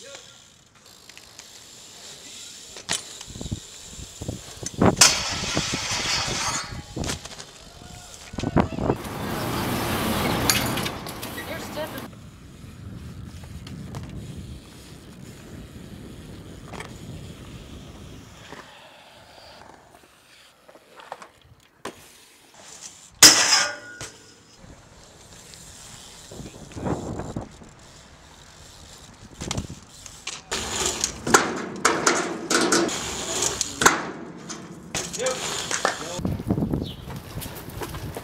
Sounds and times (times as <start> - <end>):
Bicycle: 0.0 - 38.2
Outside, urban or manmade: 0.0 - 38.2.